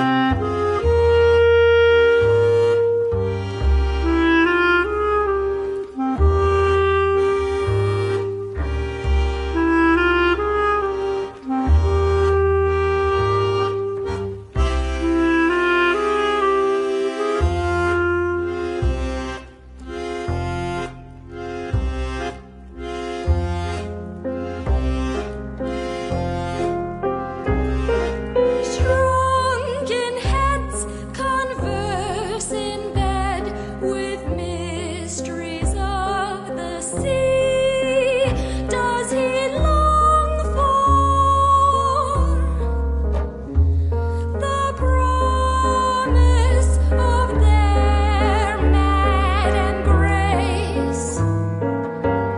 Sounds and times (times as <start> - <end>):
Wind instrument, woodwind instrument: 0.0 - 21.2.